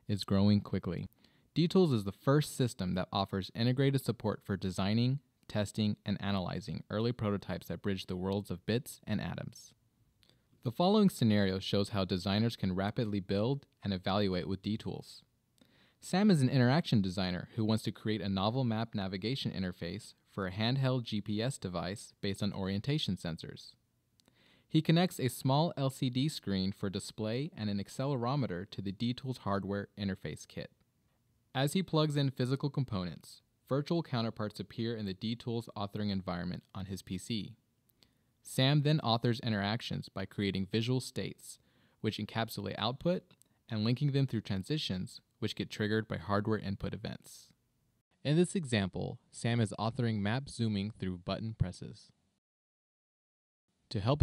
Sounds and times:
Speech: 0:00.0 - 0:09.8, 0:10.6 - 0:15.3, 0:16.0 - 0:23.8, 0:24.7 - 0:30.8, 0:31.5 - 0:37.6, 0:38.4 - 0:47.6, 0:48.2 - 0:52.2, 0:53.9 - 0:54.2.

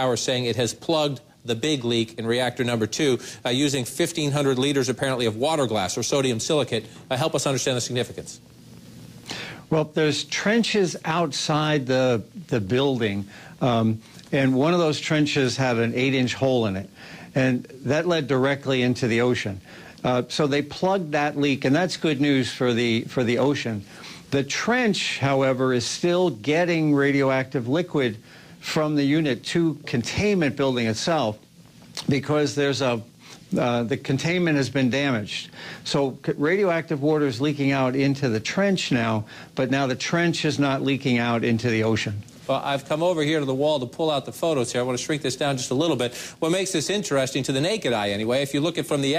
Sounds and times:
Speech: 0:00.0 - 0:08.4, 0:09.7 - 0:31.4, 0:32.0 - 0:49.1.

